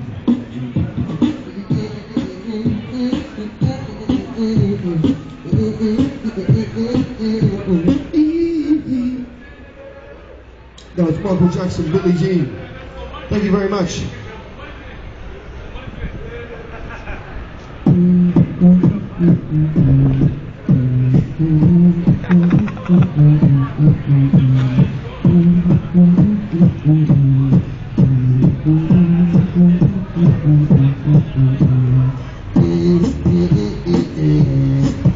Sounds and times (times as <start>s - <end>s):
Beatboxing: 0.0s - 9.3s, 17.8s - 35.1s
Speech: 8.9s - 17.2s.